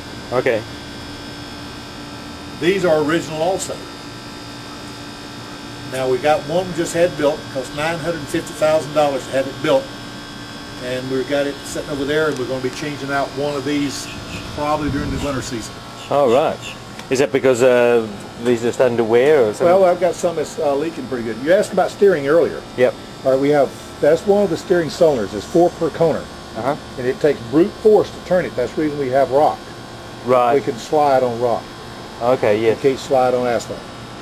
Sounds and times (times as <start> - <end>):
Speech: 0.3 - 0.7, 5.9 - 9.9, 10.8 - 29.6, 30.2 - 31.6, 32.2 - 33.9.